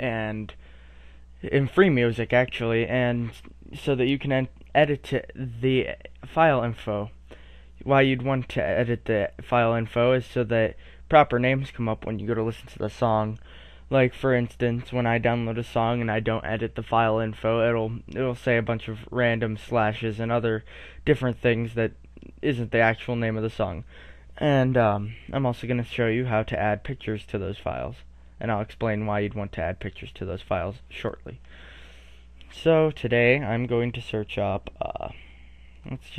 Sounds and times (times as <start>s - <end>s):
Speech: 0.0s - 0.6s, 1.4s - 7.2s, 7.8s - 31.4s, 32.5s - 36.1s.